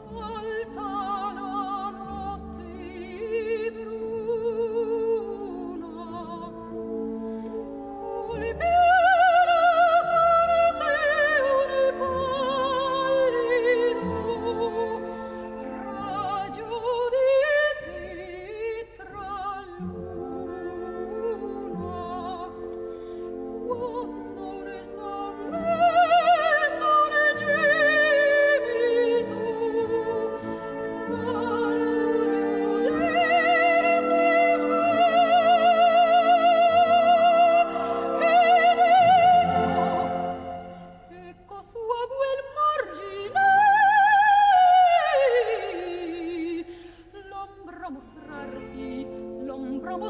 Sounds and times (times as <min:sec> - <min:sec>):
Opera: 0:00.0 - 0:50.1
Orchestra: 0:00.0 - 0:50.1.